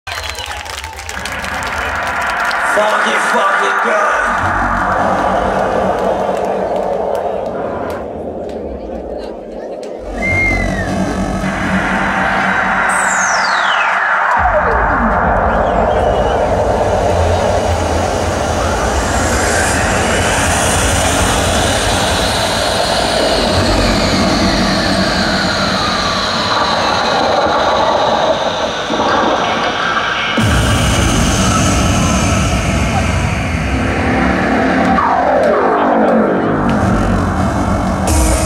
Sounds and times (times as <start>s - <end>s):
Crowd: 0.0s - 38.4s
Music: 0.1s - 38.4s
Speech: 2.6s - 4.4s.